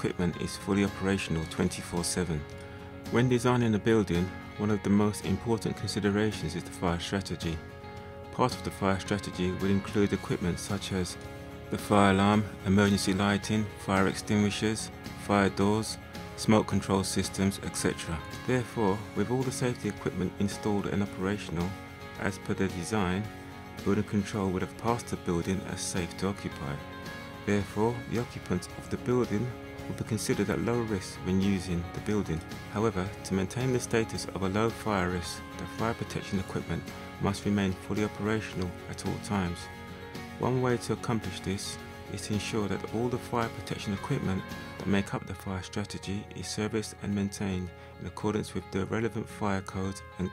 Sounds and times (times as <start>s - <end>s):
Speech: 0.0s - 2.5s, 3.1s - 7.7s, 8.3s - 39.7s, 40.4s - 50.3s
Music: 0.0s - 50.3s.